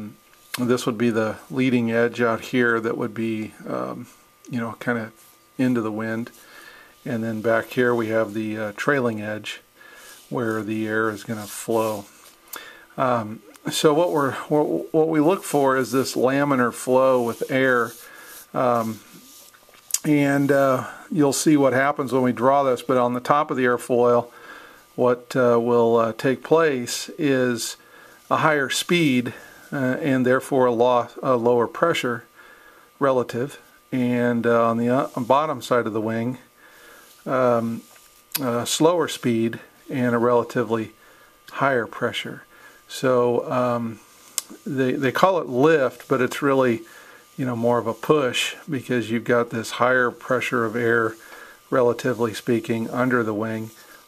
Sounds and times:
Speech: 0.0 - 6.4, 7.0 - 9.7, 10.3 - 12.2, 13.0 - 19.3, 19.9 - 24.4, 25.0 - 32.3, 33.0 - 36.5, 37.2 - 53.8.

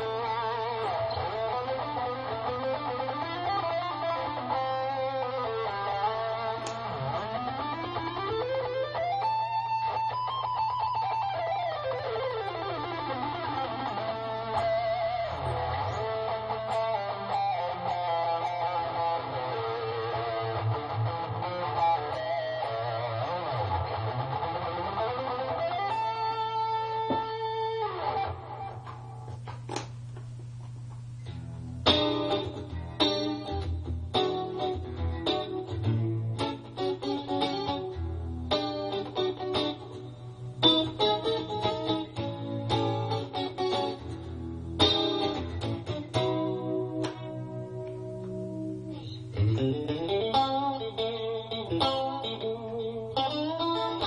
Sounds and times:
Music: 0.0 - 29.6, 31.2 - 54.0.

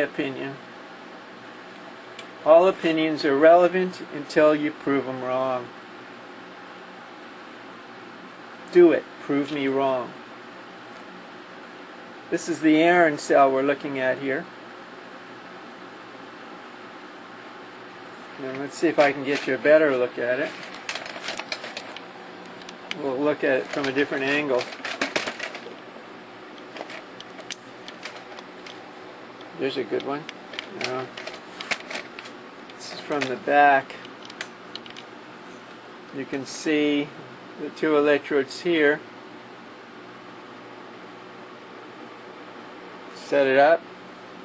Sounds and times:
Speech: 0.0 - 0.7, 2.4 - 5.8, 8.7 - 10.2, 12.3 - 14.5, 18.4 - 20.6, 23.0 - 24.7, 29.6 - 31.2, 32.8 - 34.0, 36.1 - 39.1, 43.2 - 43.8.

